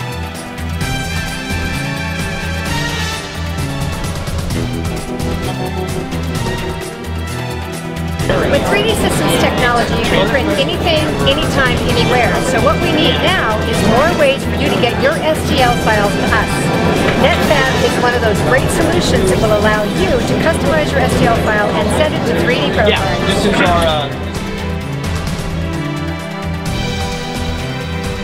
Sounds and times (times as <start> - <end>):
Music: 0.0 - 28.2
Speech: 8.2 - 24.2.